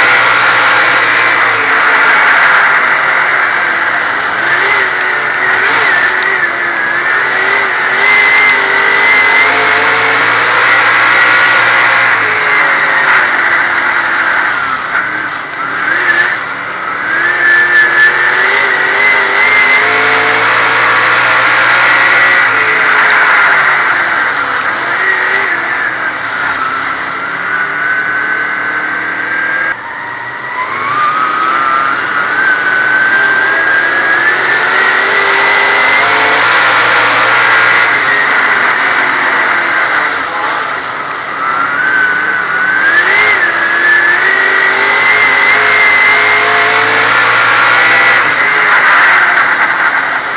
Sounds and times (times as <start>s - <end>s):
Skidding: 0.0s - 50.3s.